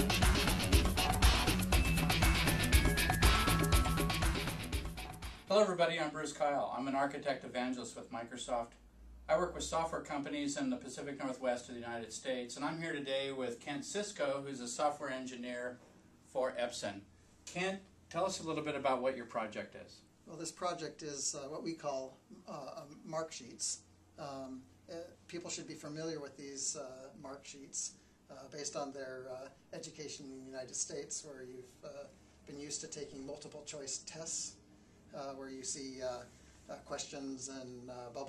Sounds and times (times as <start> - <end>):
Speech: 5.5 - 38.2.